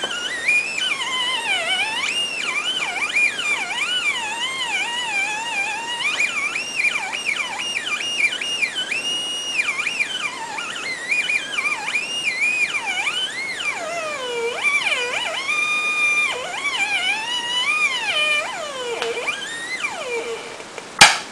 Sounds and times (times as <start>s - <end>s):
Theremin: 0.0s - 20.8s
Inside, small room: 0.0s - 21.3s.